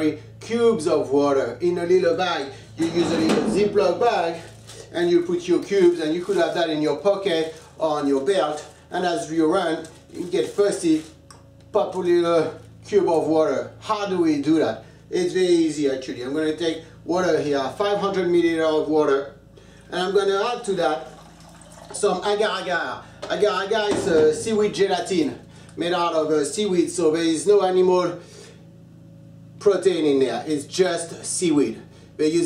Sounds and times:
Speech: 0.0 - 21.1, 21.9 - 28.2, 29.6 - 32.4.

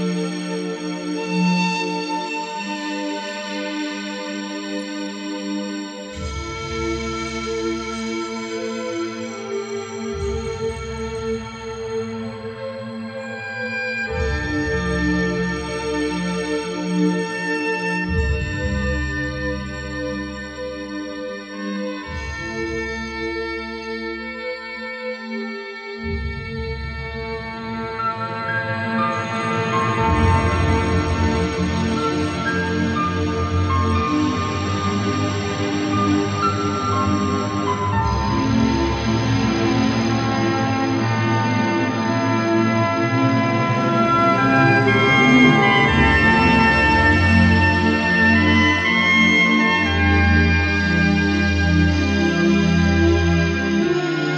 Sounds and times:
Music: 0.0 - 54.3.

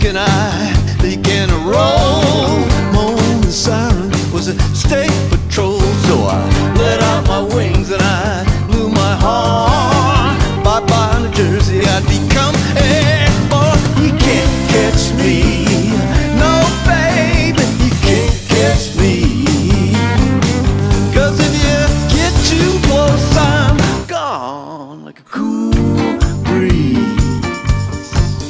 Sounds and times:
Rock and roll: 0.0 - 24.5, 25.7 - 28.4
Independent music: 0.0 - 28.4.

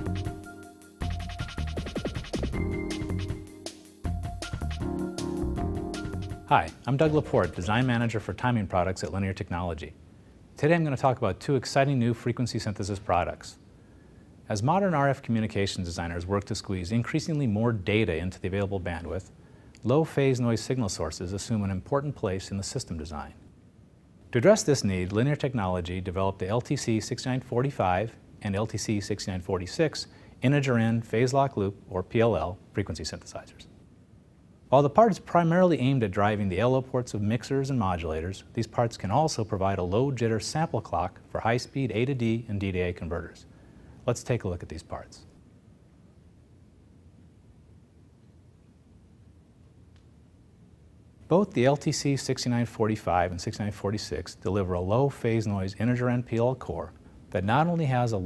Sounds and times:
Speech: 6.5 - 10.0, 10.6 - 13.6, 14.5 - 23.4, 24.3 - 33.7, 34.7 - 45.3, 51.3 - 58.2.

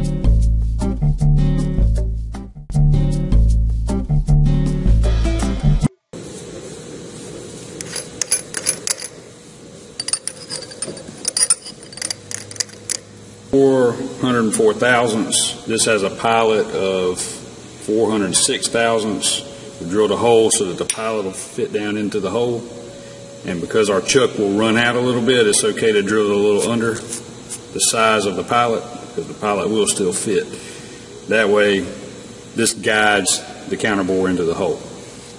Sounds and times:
Music: 0.0 - 6.1.

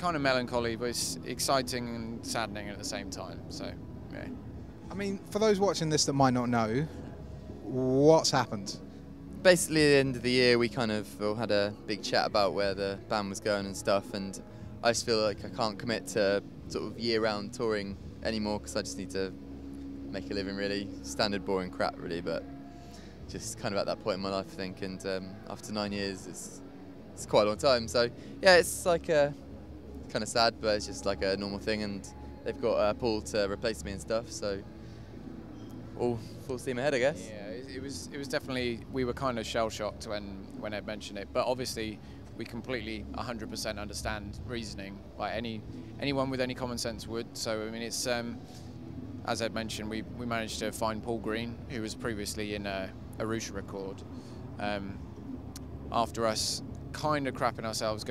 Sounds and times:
Speech: 0.0 - 4.3, 9.4 - 19.3, 23.3 - 26.5, 27.2 - 29.4, 30.1 - 34.6, 36.0 - 48.4, 49.3 - 54.0, 54.6 - 55.0, 55.9 - 58.1.

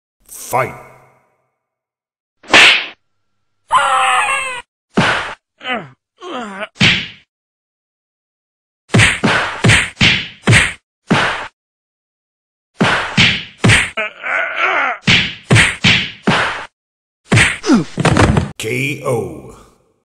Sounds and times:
Speech: 0.4 - 0.9, 18.6 - 19.8.

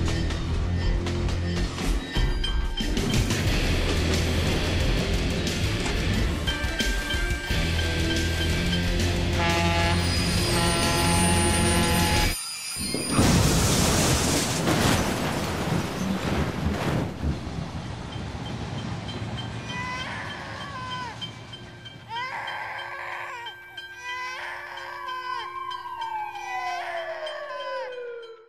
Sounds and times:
Vehicle: 16.8 - 22.2.

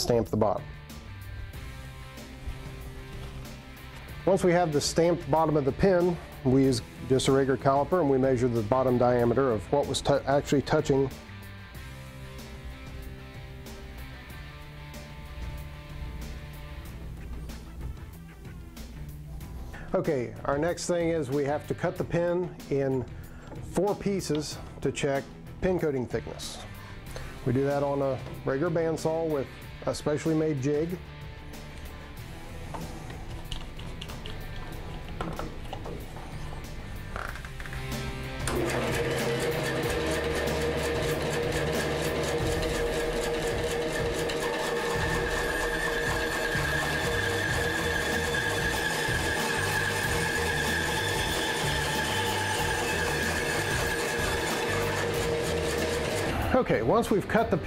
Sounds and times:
Sewing machine: 38.4 - 56.5.

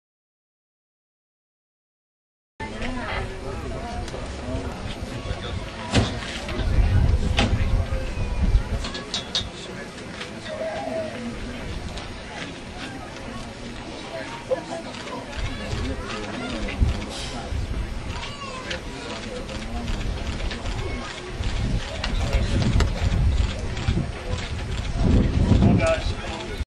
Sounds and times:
Speech: 2.6 - 26.6.

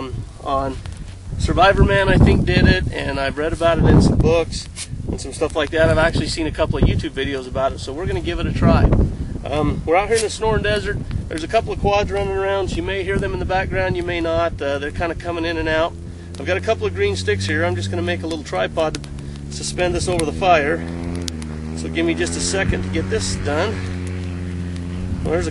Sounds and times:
Wind noise (microphone): 0.0 - 18.2, 18.8 - 25.5
Fire: 0.0 - 25.5.

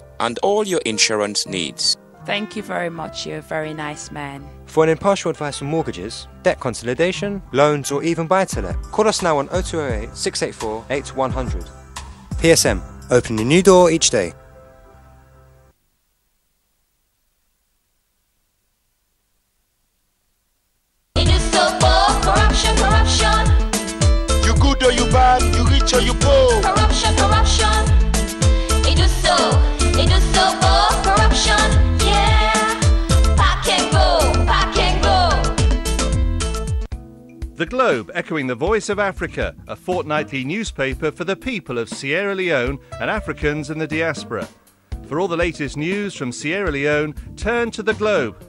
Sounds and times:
Music: 0.0 - 15.8, 21.2 - 48.4
Speech: 0.2 - 11.7, 12.4 - 14.4, 37.6 - 48.4.

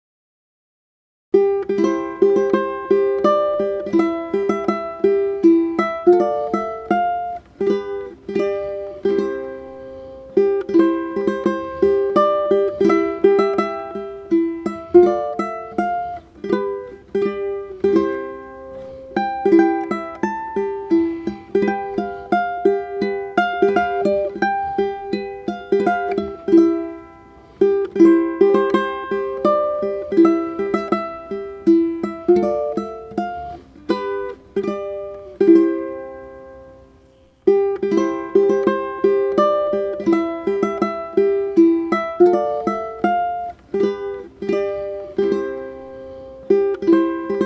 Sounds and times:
Ukulele: 1.4 - 47.4.

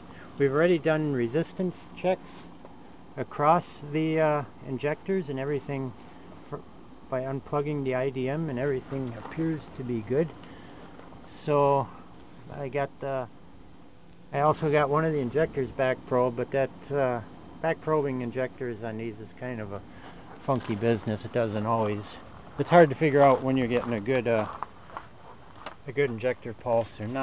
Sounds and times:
Speech: 0.4 - 2.5, 3.2 - 10.4, 11.3 - 13.3, 14.3 - 19.8, 20.4 - 24.6, 25.8 - 27.2.

